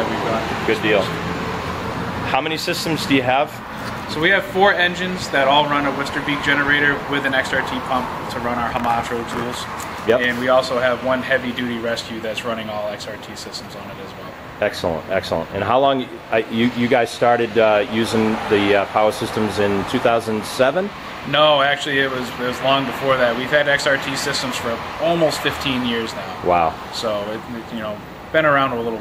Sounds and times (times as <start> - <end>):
Speech: 0.0 - 1.1, 2.3 - 29.0.